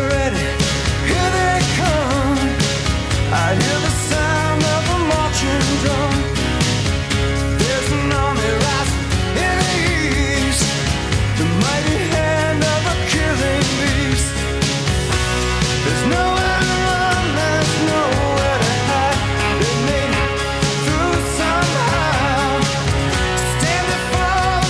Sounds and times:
Music: 0.0s - 24.6s.

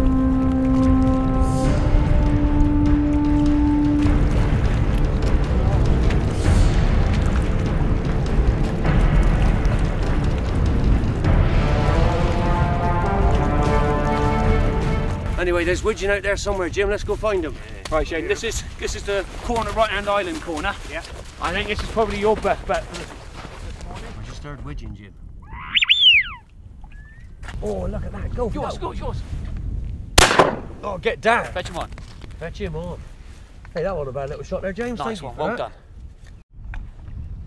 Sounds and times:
Music: 0.0s - 16.0s
Speech: 15.4s - 23.1s, 27.6s - 29.2s, 30.8s - 33.0s, 33.8s - 35.8s.

